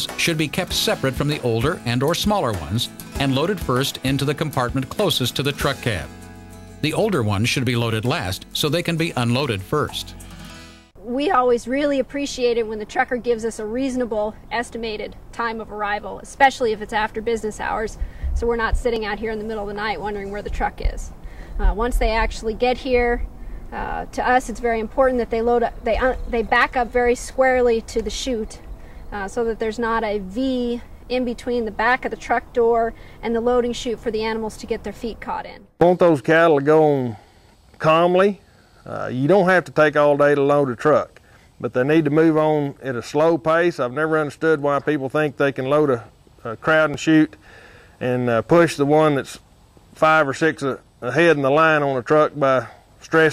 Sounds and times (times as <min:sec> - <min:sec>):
Music: 0:00.0 - 0:11.0
Speech: 0:00.1 - 0:06.1, 0:06.8 - 0:10.2, 0:11.0 - 0:23.2, 0:23.8 - 0:28.6.